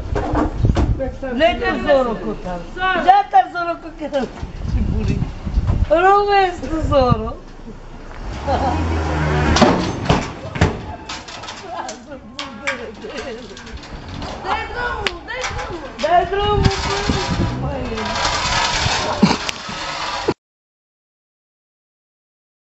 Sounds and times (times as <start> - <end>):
Speech: 14.4 - 18.2.